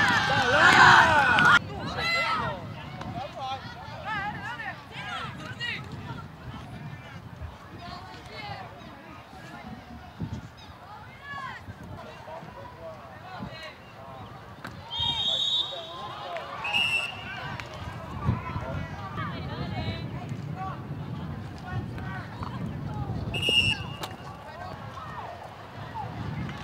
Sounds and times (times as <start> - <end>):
Speech: 0.0 - 23.4, 24.1 - 26.6.